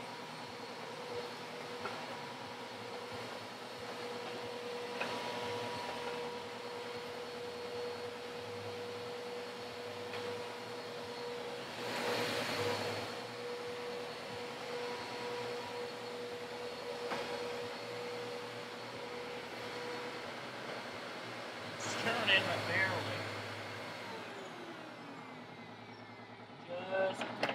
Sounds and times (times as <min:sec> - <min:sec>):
Speech: 0:21.8 - 0:23.3, 0:26.7 - 0:27.3.